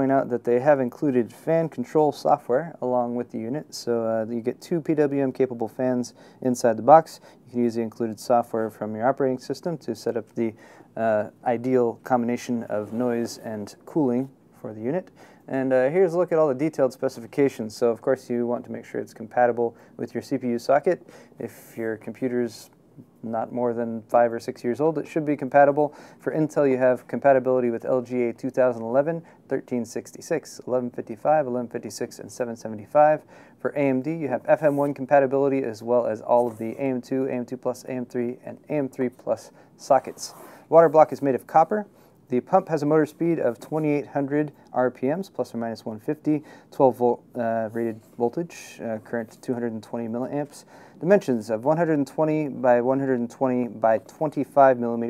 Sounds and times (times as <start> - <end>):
Speech: 0.0 - 55.1.